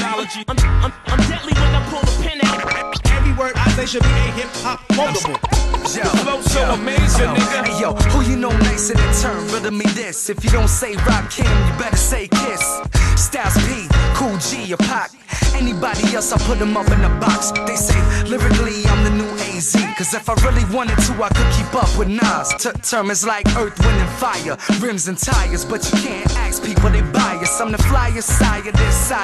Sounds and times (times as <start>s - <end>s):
Music: 0.0s - 29.2s
Rapping: 0.0s - 29.2s.